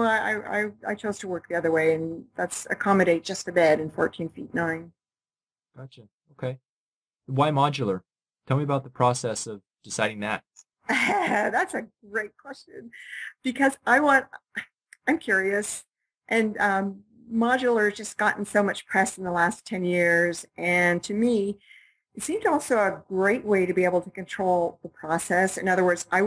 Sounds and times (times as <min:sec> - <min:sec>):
Speech: 0:00.0 - 0:04.9, 0:05.8 - 0:06.6, 0:07.3 - 0:10.4, 0:11.1 - 0:21.6, 0:22.2 - 0:26.2
Inside, small room: 0:07.3 - 0:26.2.